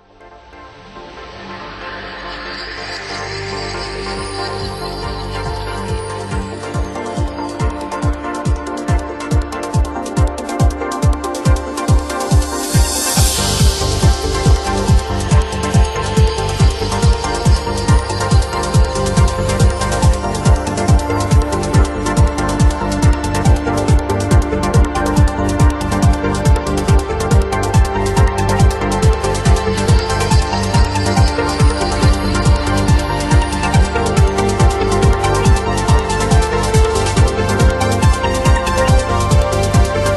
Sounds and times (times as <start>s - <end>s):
Exciting music: 0.0s - 40.1s.